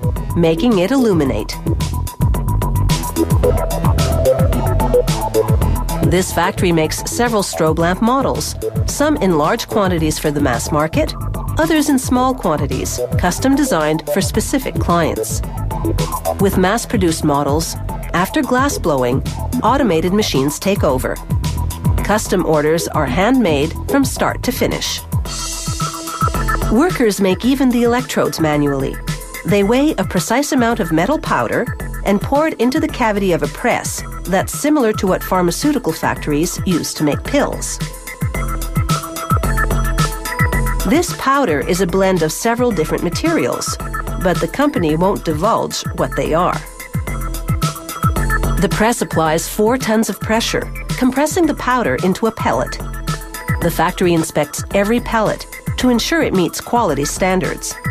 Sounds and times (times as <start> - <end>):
Music: 0.0 - 57.9
Speech: 0.4 - 1.6, 6.0 - 15.4, 16.4 - 21.2, 22.0 - 25.0, 26.7 - 37.8, 40.9 - 46.7, 48.6 - 52.8, 53.6 - 57.8.